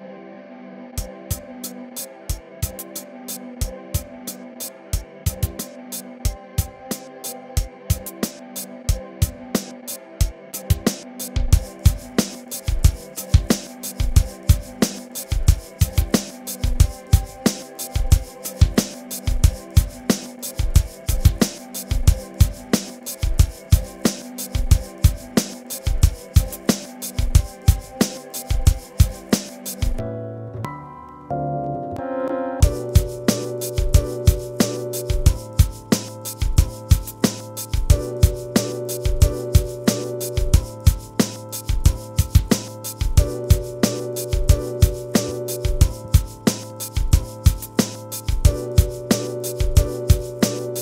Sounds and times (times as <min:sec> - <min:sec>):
Music: 0:00.0 - 0:50.8.